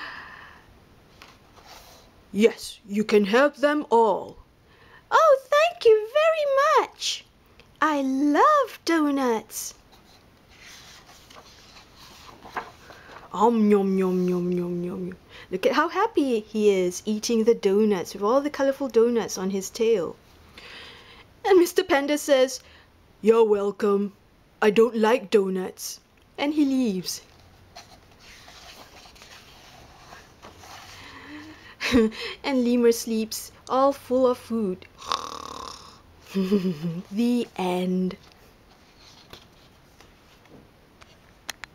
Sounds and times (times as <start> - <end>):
Speech: 2.3 - 4.4, 5.1 - 9.8, 13.3 - 20.2, 21.4 - 22.6, 23.2 - 27.3, 32.4 - 34.9, 36.9 - 38.2.